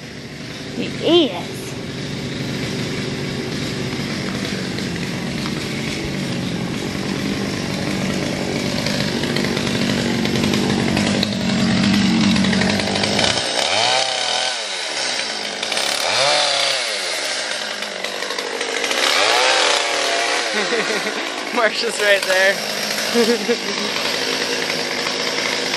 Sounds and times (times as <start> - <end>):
Jackhammer: 0.0 - 25.7
Outside, urban or manmade: 0.0 - 25.7
Speech: 0.8 - 1.7, 21.5 - 22.6.